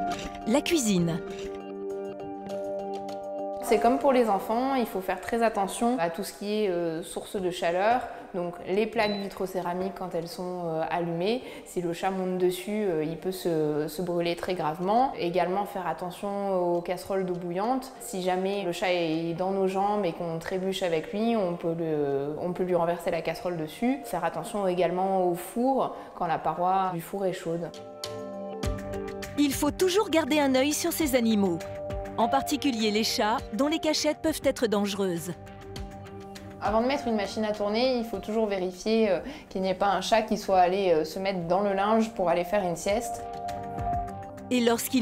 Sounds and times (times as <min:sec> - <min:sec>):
Music: 0:00.0 - 0:45.0
Speech: 0:00.5 - 0:01.2, 0:29.4 - 0:31.6, 0:32.2 - 0:35.4, 0:36.6 - 0:43.2, 0:44.5 - 0:45.0.